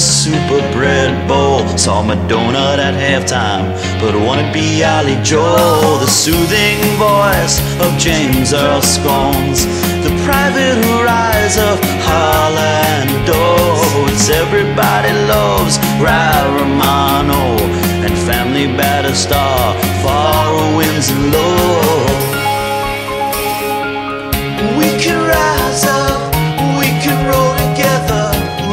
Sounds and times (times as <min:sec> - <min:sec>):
Happy music: 0:00.0 - 0:28.7.